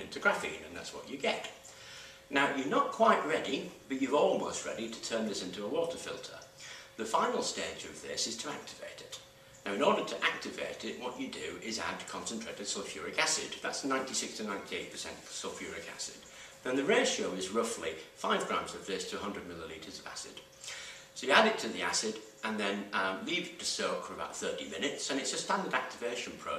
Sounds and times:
Speech: 0.0s - 1.6s, 2.3s - 20.4s, 21.2s - 26.5s
Inside, small room: 0.0s - 26.5s.

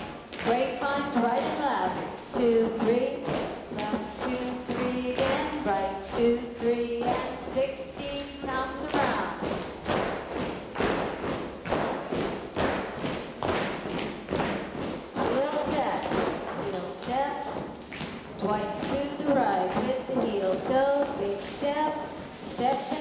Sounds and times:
Speech: 0.4s - 9.4s, 15.2s - 17.6s, 18.4s - 23.0s.

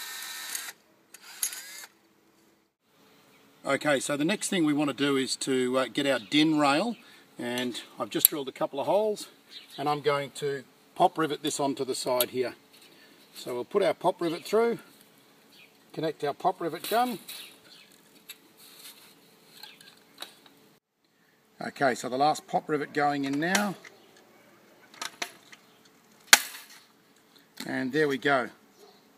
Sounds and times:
Mechanisms: 0.0s - 29.1s.

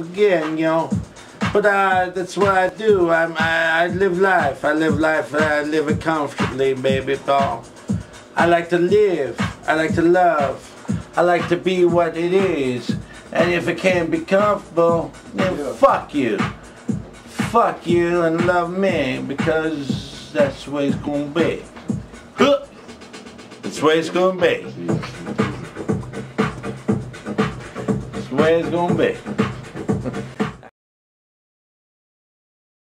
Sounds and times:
Speech: 0.0s - 7.7s, 8.4s - 10.6s, 11.2s - 16.5s, 17.3s - 21.7s, 22.4s - 22.8s, 23.6s - 25.7s, 28.2s - 29.2s
Techno: 0.0s - 30.7s.

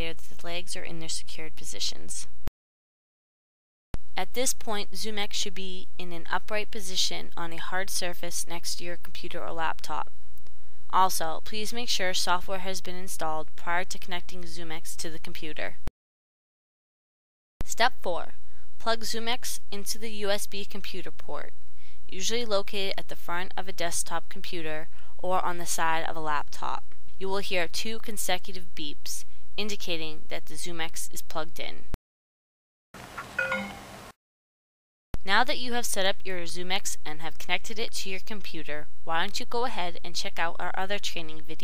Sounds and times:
Speech: 0.0s - 2.3s, 4.2s - 10.1s, 10.9s - 15.8s, 17.6s - 21.5s, 22.1s - 31.9s, 35.2s - 41.6s.

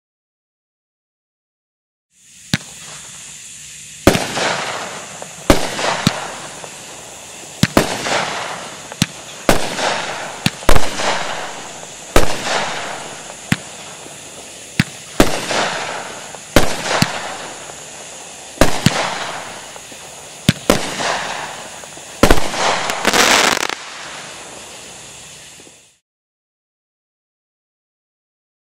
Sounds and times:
Fireworks: 2.2s - 26.0s.

